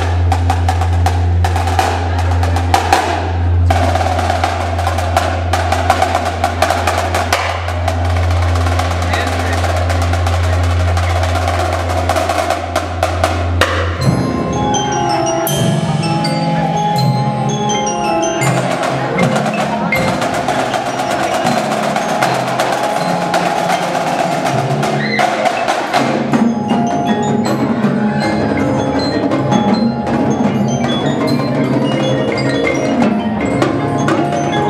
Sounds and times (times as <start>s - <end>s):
Marimba, xylophone: 0.0s - 34.6s
Glockenspiel: 13.9s - 34.6s.